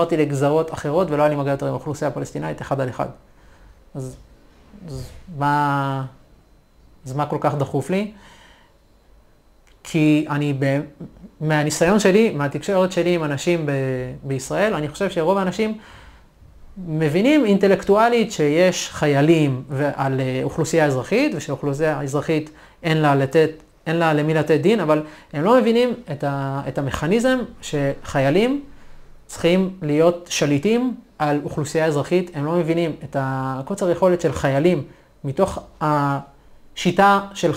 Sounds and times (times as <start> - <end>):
Speech: 0.0 - 3.2, 4.0 - 6.2, 7.0 - 8.2, 9.8 - 15.8, 16.8 - 28.7, 29.3 - 37.5.